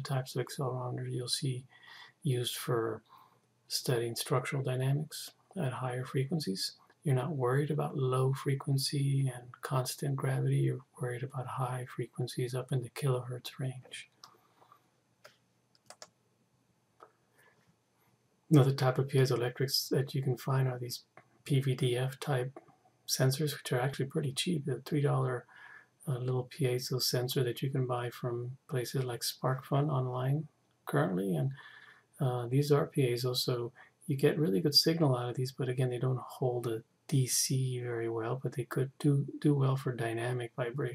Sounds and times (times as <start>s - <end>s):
Speech: 0.0s - 3.1s, 3.7s - 14.2s, 18.5s - 40.9s.